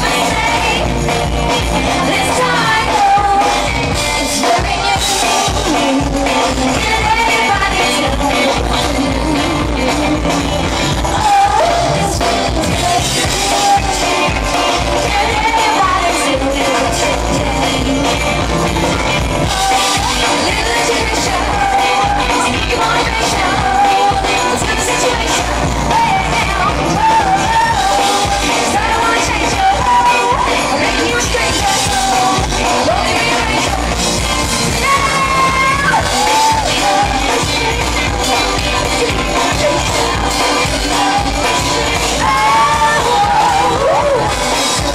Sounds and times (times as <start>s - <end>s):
Music: 0.0s - 44.9s
Singing: 0.0s - 44.9s.